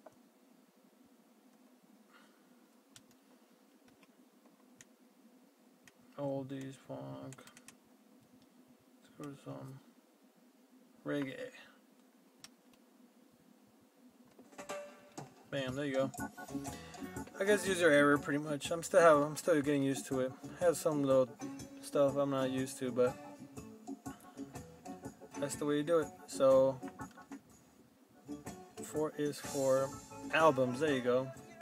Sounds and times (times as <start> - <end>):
Speech: 6.2 - 7.4, 9.0 - 9.9, 11.0 - 11.8, 15.5 - 16.2, 17.4 - 23.2, 25.4 - 26.8, 28.9 - 31.4.